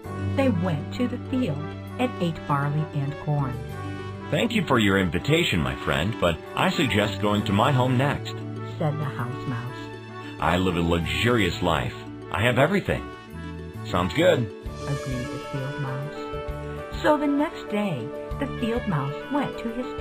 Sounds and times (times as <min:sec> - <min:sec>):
Music: 0:00.0 - 0:20.0
Speech: 0:00.4 - 0:03.6, 0:04.3 - 0:09.8, 0:10.4 - 0:13.1, 0:13.9 - 0:16.2, 0:17.0 - 0:20.0.